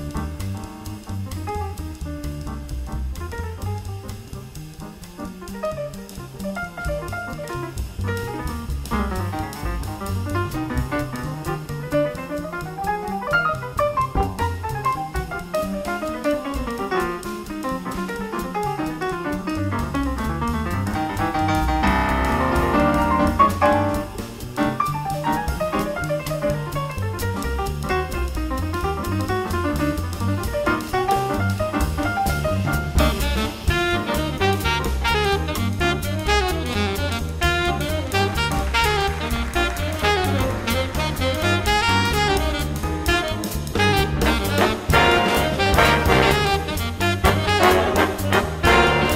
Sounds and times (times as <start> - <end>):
Music: 0.0 - 49.1.